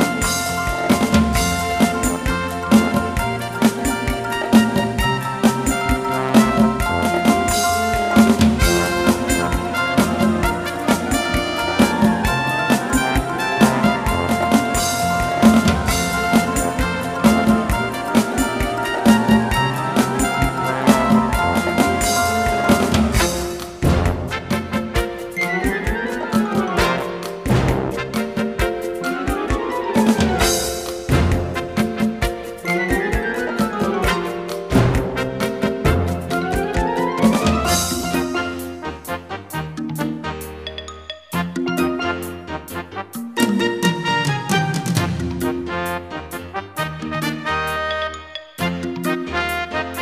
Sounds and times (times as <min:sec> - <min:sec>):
Theme music: 0:00.0 - 0:50.0.